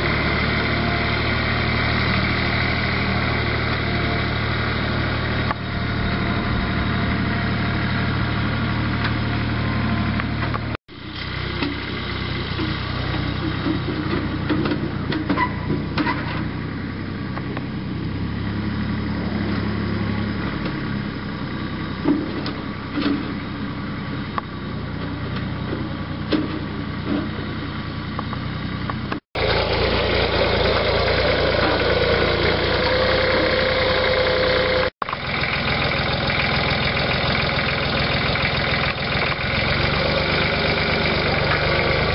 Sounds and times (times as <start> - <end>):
Vehicle: 0.0 - 42.1.